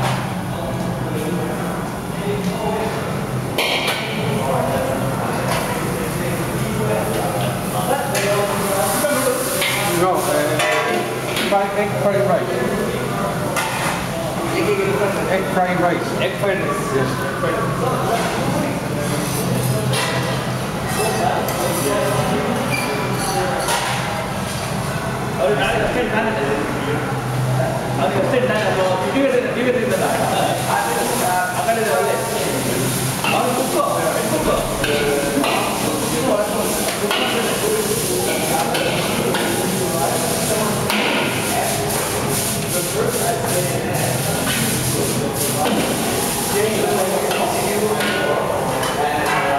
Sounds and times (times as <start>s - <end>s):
Speech: 0.0s - 49.5s.